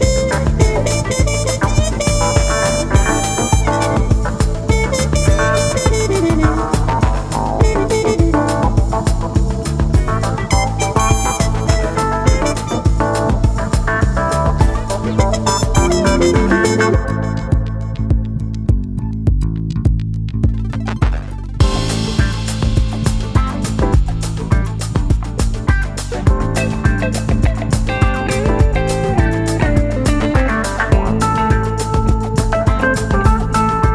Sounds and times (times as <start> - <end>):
Sampler: 0.0 - 18.2.